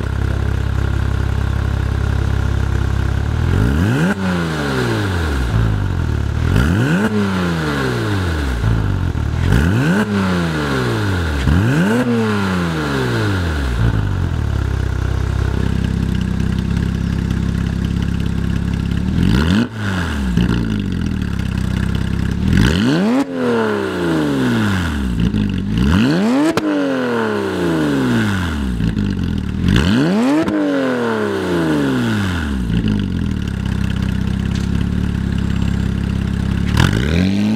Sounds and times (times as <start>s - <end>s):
Clatter: 0.0s - 26.9s, 27.9s - 30.8s, 31.6s - 37.5s.